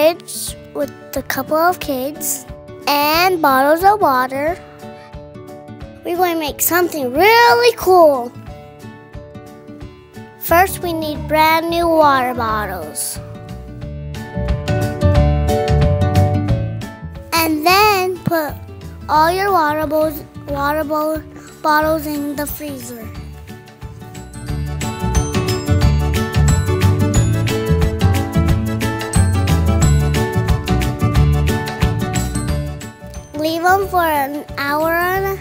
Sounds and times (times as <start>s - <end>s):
Music: 0.0s - 35.4s
Speech: 6.1s - 8.3s, 10.4s - 13.2s, 17.4s - 23.1s, 33.4s - 35.4s.